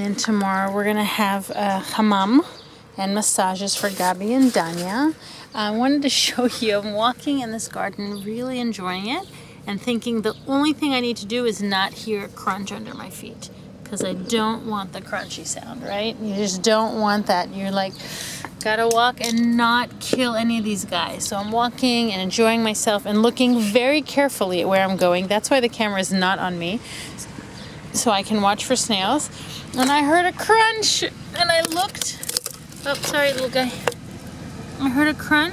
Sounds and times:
Speech: 0:00.0 - 0:18.0, 0:18.6 - 0:26.8, 0:28.0 - 0:32.2, 0:32.8 - 0:33.8, 0:34.8 - 0:35.5.

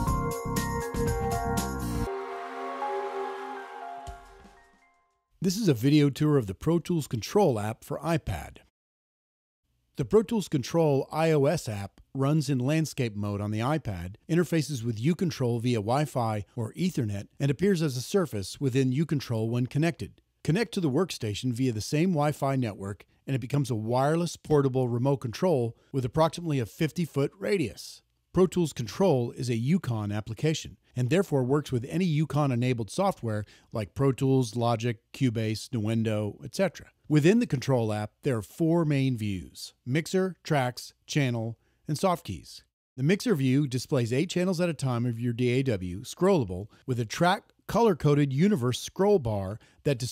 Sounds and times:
Speech: 0:05.4 - 0:08.7, 0:10.0 - 0:50.1.

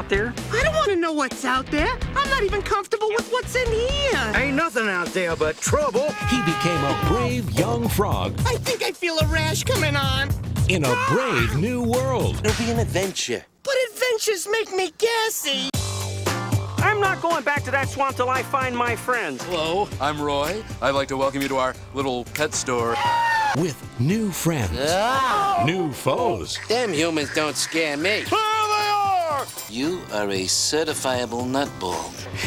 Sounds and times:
Music: 0:00.0 - 0:13.3, 0:15.8 - 0:32.4
Speech: 0:00.0 - 0:15.8, 0:16.8 - 0:23.0.

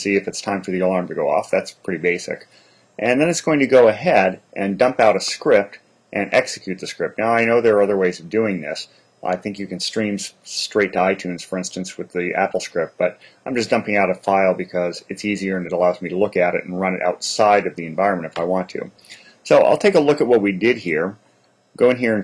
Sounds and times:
Speech: 0:00.0 - 0:21.2, 0:21.8 - 0:22.2.

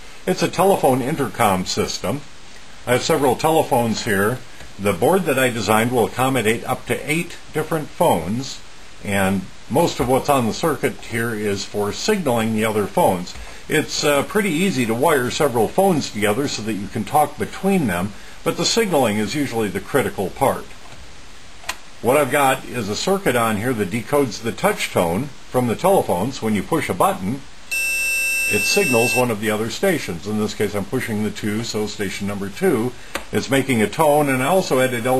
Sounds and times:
Speech: 0:00.3 - 0:02.3, 0:02.9 - 0:20.8, 0:22.0 - 0:27.5, 0:28.5 - 0:35.1.

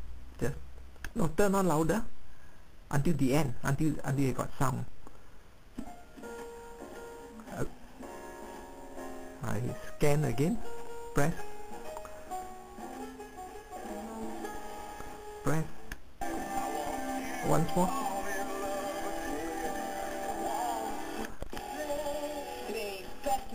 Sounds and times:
Music: 0:05.8 - 0:23.5
Radio: 0:16.2 - 0:23.5
Speech: 0:17.4 - 0:18.0.

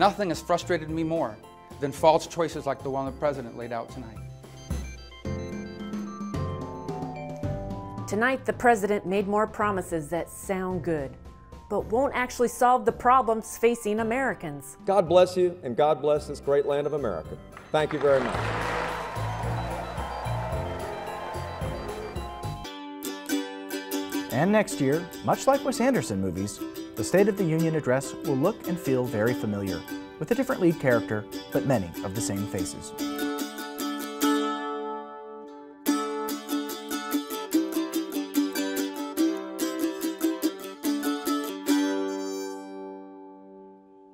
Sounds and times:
Mandolin: 0:19.3 - 0:43.6.

